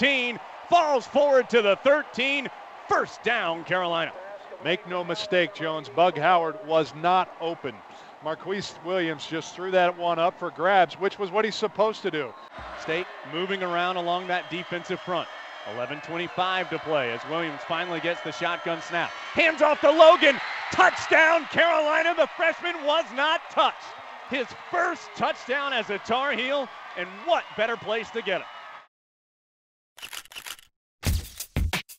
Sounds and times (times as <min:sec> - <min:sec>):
Speech: 0:00.0 - 0:28.5.